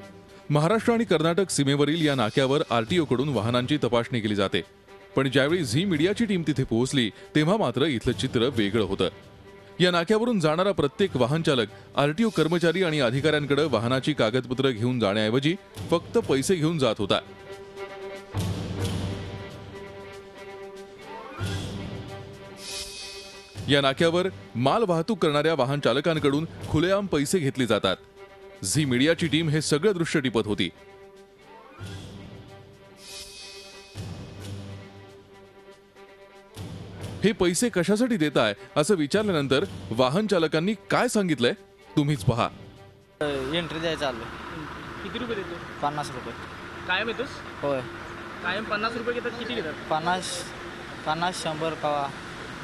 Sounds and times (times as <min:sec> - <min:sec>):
Music: 0:00.0 - 0:52.6
Speech: 0:00.5 - 0:04.6, 0:05.2 - 0:09.1, 0:09.8 - 0:17.2, 0:23.7 - 0:28.0, 0:28.6 - 0:30.7, 0:37.2 - 0:42.6, 0:43.2 - 0:50.5, 0:51.1 - 0:52.1.